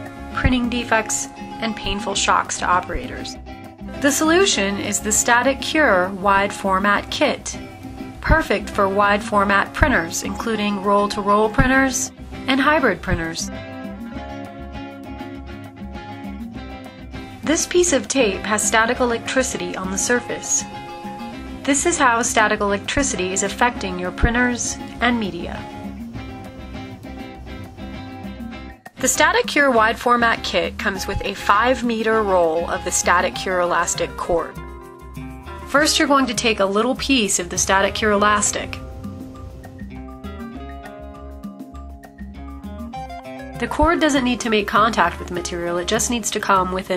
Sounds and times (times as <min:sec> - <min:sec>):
Music: 0:00.0 - 0:46.9
Speech: 0:00.4 - 0:03.4, 0:04.0 - 0:07.6, 0:08.2 - 0:13.5, 0:17.5 - 0:20.6, 0:21.6 - 0:25.7, 0:29.0 - 0:34.6, 0:35.7 - 0:38.8, 0:43.6 - 0:46.9.